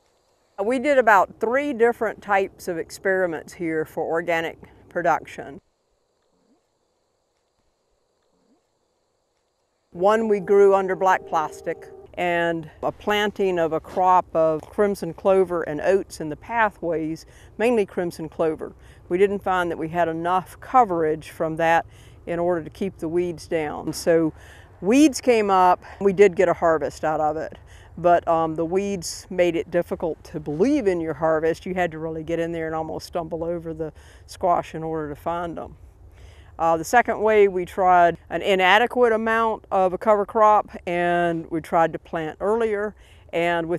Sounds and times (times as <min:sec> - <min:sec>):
Speech: 0:00.6 - 0:05.6, 0:10.0 - 0:35.8, 0:36.6 - 0:43.7.